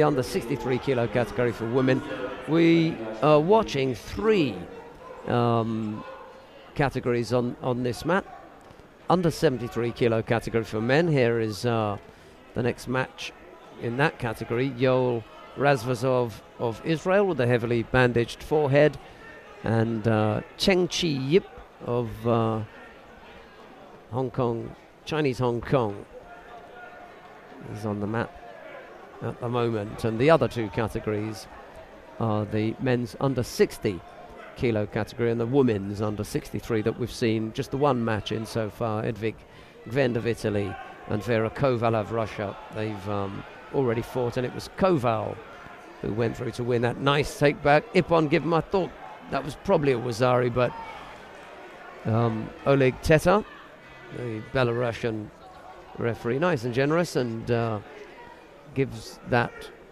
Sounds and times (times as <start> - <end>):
Speech: 0.0 - 6.1, 6.8 - 8.3, 9.1 - 19.0, 19.6 - 22.7, 24.1 - 26.8, 27.6 - 28.4, 29.2 - 31.5, 32.2 - 45.4, 46.0 - 50.8, 52.0 - 53.5, 54.1 - 58.0, 58.7 - 59.8.